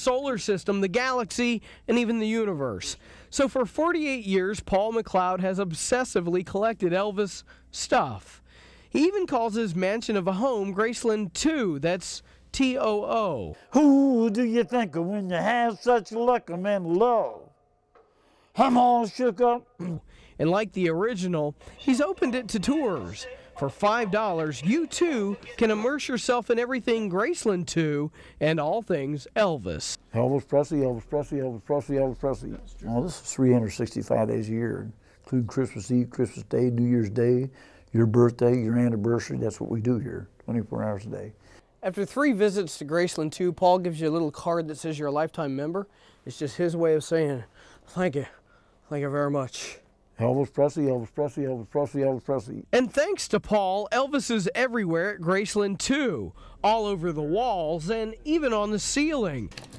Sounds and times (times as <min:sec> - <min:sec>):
Speech: 0:09.0 - 0:17.5, 0:18.6 - 0:59.5.